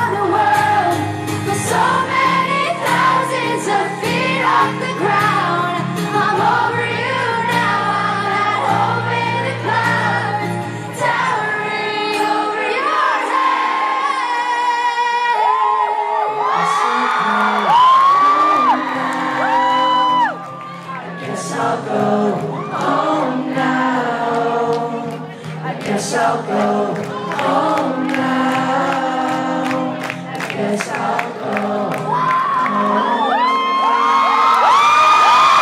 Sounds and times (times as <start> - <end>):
Female singing: 0.0 - 34.6
Music: 0.0 - 35.6.